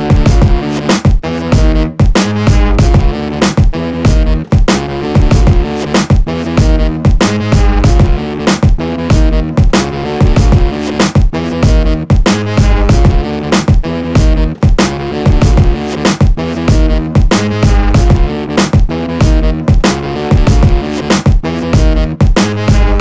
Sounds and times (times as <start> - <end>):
Dance music: 0.0 - 23.0
Pop music: 0.0 - 23.0.